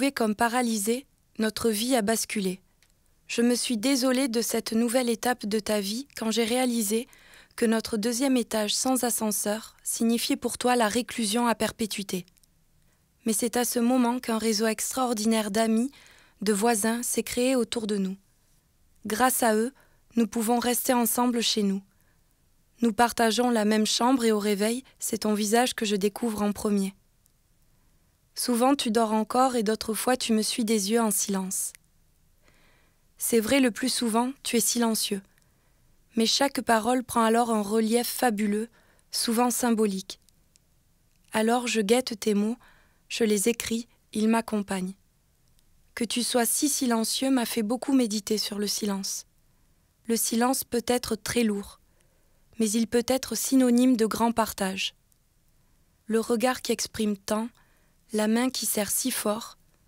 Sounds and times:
Speech: 0:00.0 - 0:02.6, 0:03.3 - 0:12.3, 0:13.2 - 0:18.2, 0:19.1 - 0:21.9, 0:22.8 - 0:27.0, 0:28.4 - 0:31.8, 0:33.2 - 0:35.3, 0:36.2 - 0:40.2, 0:41.3 - 0:45.0, 0:46.0 - 0:49.3, 0:50.1 - 0:51.8, 0:52.6 - 0:55.0, 0:56.1 - 0:59.6.

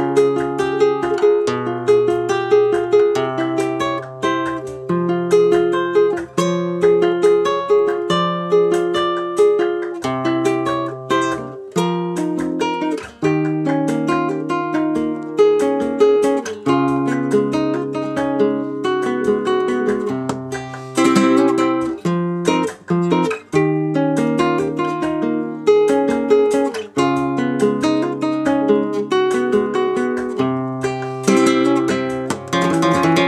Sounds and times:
Acoustic guitar: 0:00.0 - 0:33.2
Strum: 0:00.0 - 0:33.2.

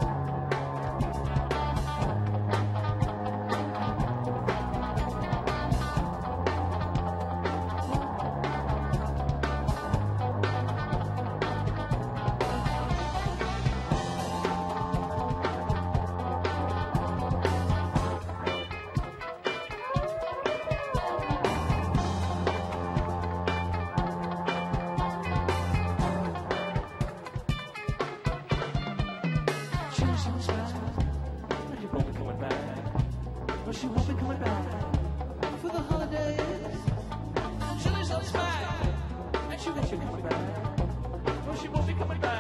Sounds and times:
Music: 0:00.0 - 0:42.4.

